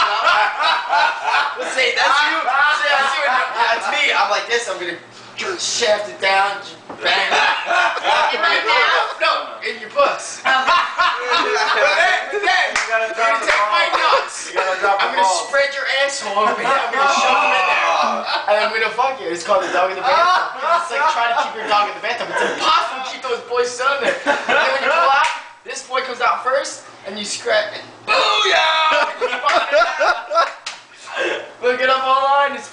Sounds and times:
Speech: 1.5 - 10.5, 11.2 - 29.8, 31.2 - 32.7.

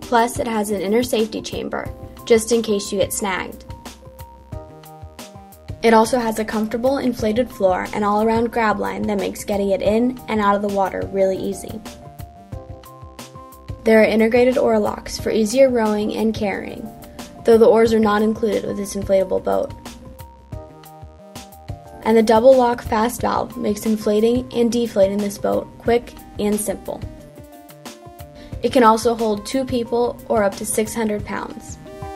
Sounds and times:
Music: 0.0 - 32.1
Speech: 0.1 - 3.6, 5.8 - 11.8, 13.8 - 19.8, 22.0 - 27.0, 28.6 - 31.8.

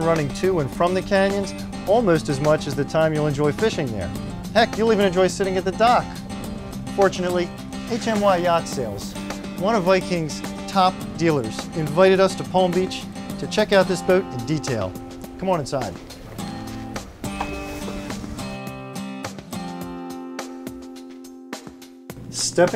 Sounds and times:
Speech: 0.0 - 6.2, 7.0 - 16.0, 22.3 - 22.7
Music: 0.0 - 22.7.

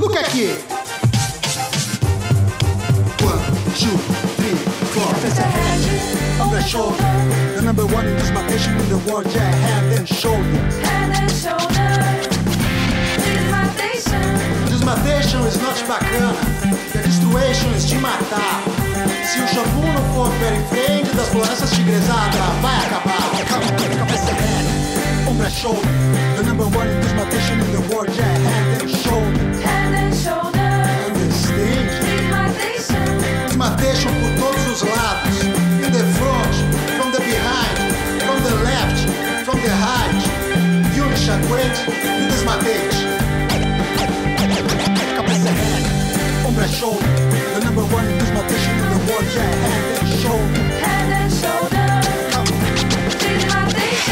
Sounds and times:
Music: 0.0 - 54.1
Male singing: 3.2 - 12.3, 14.5 - 24.6, 25.2 - 30.3, 30.9 - 43.1, 45.2 - 54.1.

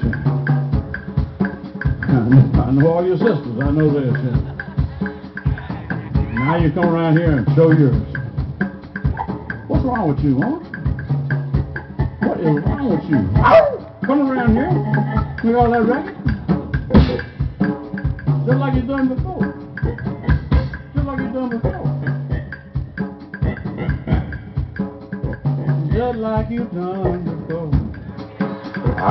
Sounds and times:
Drum: 0.0 - 29.1
Drum kit: 0.0 - 29.1
Speech: 2.1 - 4.4, 6.2 - 8.1, 9.7 - 10.7, 18.5 - 19.5, 25.9 - 27.8.

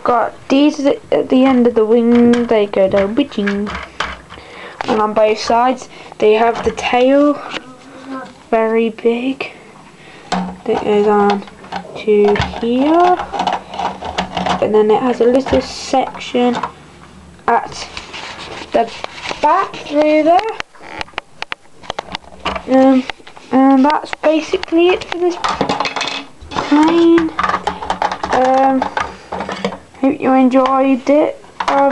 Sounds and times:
Speech: 0.0 - 3.7, 4.8 - 9.6, 10.7 - 13.2, 14.6 - 16.6, 17.5 - 17.9, 18.7 - 20.6, 22.7 - 25.4, 26.6 - 27.4, 28.3 - 28.9, 30.0 - 31.9
Inside, small room: 0.0 - 31.9.

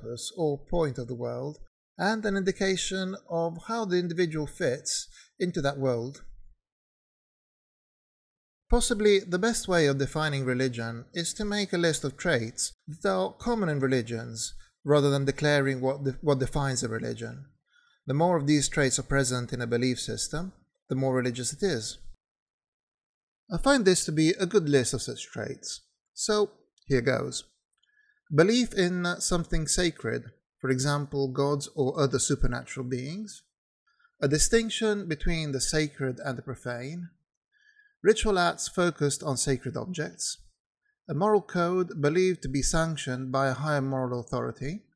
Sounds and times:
Speech: 0.0 - 6.4, 8.7 - 17.5, 18.1 - 22.2, 23.5 - 27.5, 28.3 - 33.6, 34.2 - 37.2, 38.0 - 40.5, 41.1 - 44.9.

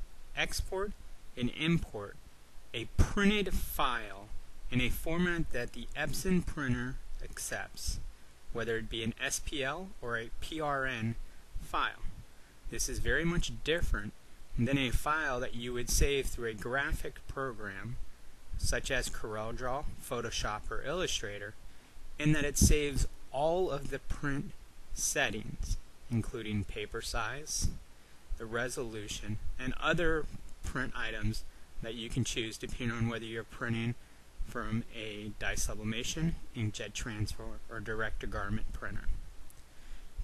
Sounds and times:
Speech: 0.4 - 2.2, 2.8 - 8.0, 8.6 - 18.0, 18.6 - 21.6, 22.2 - 27.8, 28.4 - 39.2.

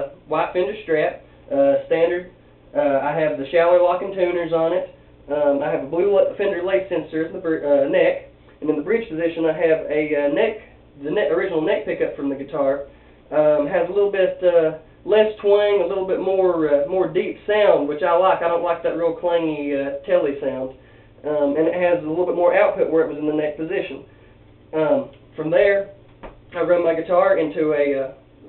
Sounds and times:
Speech: 0.0 - 24.1, 24.7 - 26.0, 26.6 - 28.4.

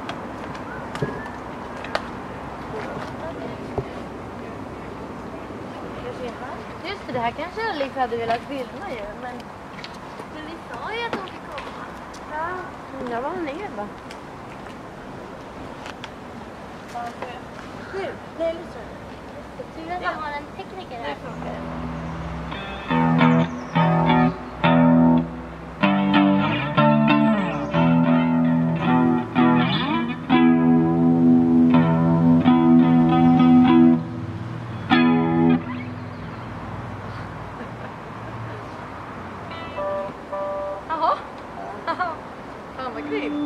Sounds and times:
Music: 22.5 - 34.2, 34.9 - 35.7, 39.5 - 40.8.

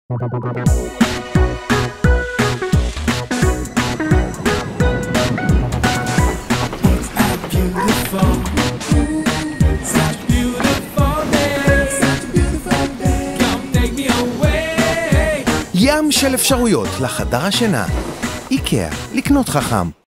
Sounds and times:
Exciting music: 0.1 - 19.4
Speech: 15.8 - 20.0.

